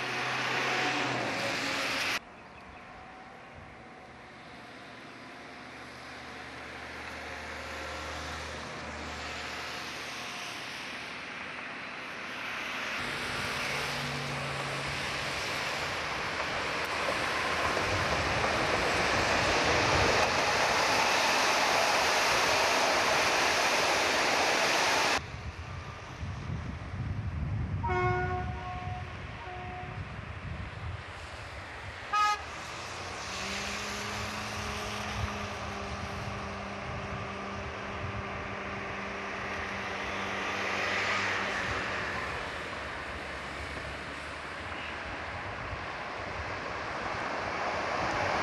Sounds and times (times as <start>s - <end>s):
Railroad car, train wagon: 0.0s - 48.4s
Train: 0.0s - 48.4s.